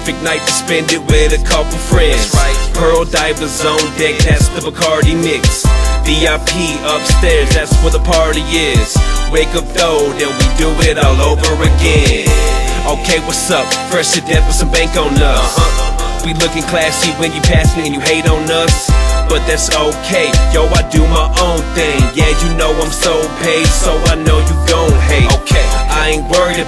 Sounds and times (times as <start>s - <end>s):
Exciting music: 0.0s - 26.6s
Pop music: 0.0s - 26.6s.